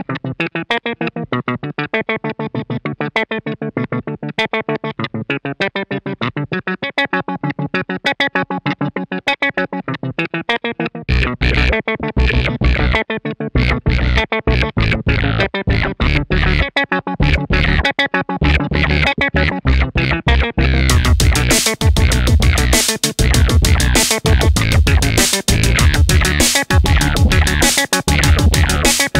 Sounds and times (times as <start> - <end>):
Electronica: 11.1 - 29.1.